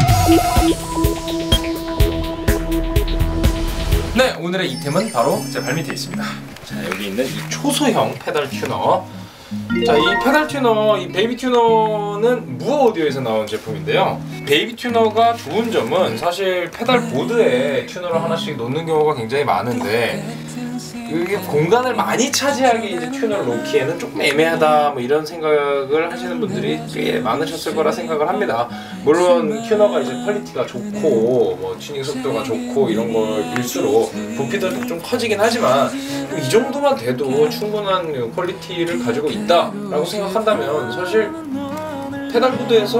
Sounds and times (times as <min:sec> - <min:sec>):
Music: 0:00.0 - 0:42.9
Speech: 0:04.2 - 0:09.1, 0:09.7 - 0:42.9.